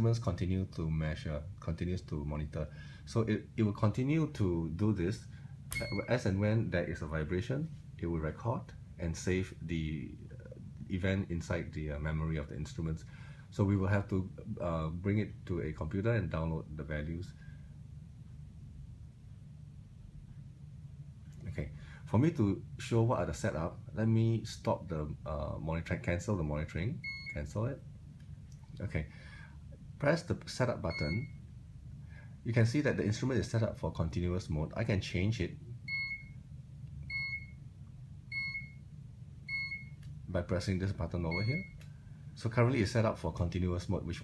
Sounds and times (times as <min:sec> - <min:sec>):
Speech: 0:00.0 - 0:17.4, 0:21.4 - 0:27.8, 0:28.8 - 0:29.1, 0:30.0 - 0:31.3, 0:32.4 - 0:35.6, 0:40.3 - 0:41.8, 0:42.4 - 0:44.2
Beep, bleep: 0:05.8 - 0:06.1, 0:27.0 - 0:27.4, 0:30.9 - 0:31.4, 0:35.9 - 0:36.4, 0:37.1 - 0:37.6, 0:38.3 - 0:38.8, 0:39.5 - 0:40.0, 0:41.3 - 0:41.8.